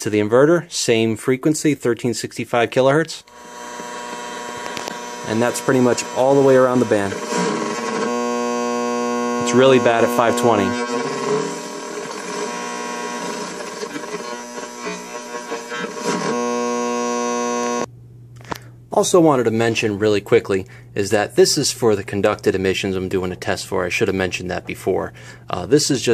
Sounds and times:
Speech: 0.0 - 3.3, 5.3 - 7.2, 9.4 - 10.9, 18.9 - 26.1
Electric shaver, electric razor: 3.3 - 17.9.

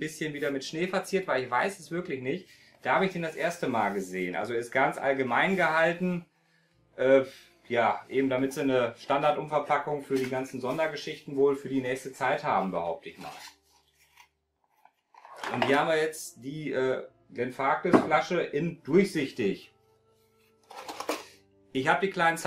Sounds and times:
Speech: 0.0 - 6.2, 7.0 - 13.4, 15.4 - 19.7, 21.8 - 22.4.

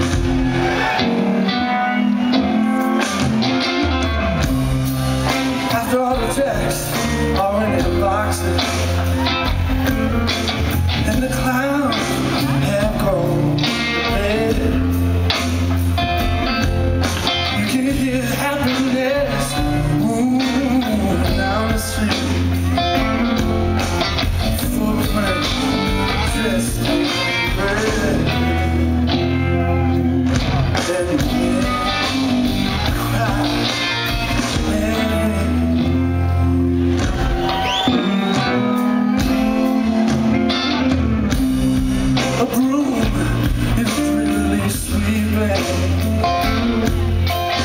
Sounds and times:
Music: 0.0 - 47.6.

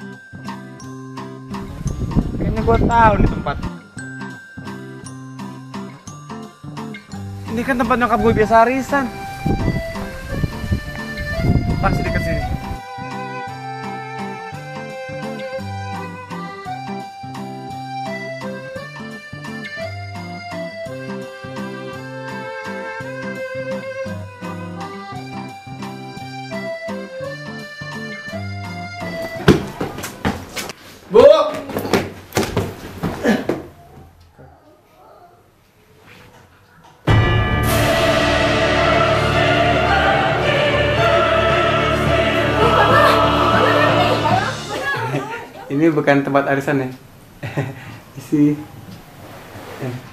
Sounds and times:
Music: 0.0 - 30.7, 37.1 - 45.4
Run: 29.3 - 30.8.

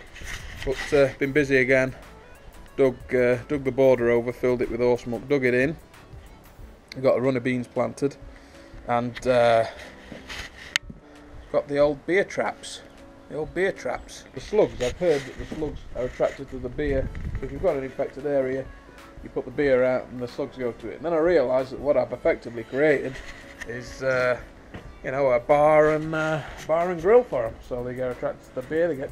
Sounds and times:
Music: 0.0 - 29.1
Speech: 0.6 - 2.0, 2.8 - 5.8, 7.0 - 8.2, 8.9 - 9.8, 11.5 - 24.4, 25.0 - 29.1.

